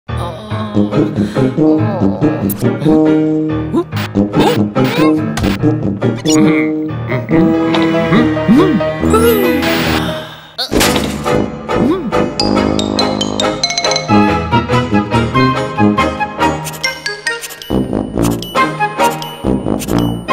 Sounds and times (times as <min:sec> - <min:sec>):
Music: 0:00.1 - 0:20.3.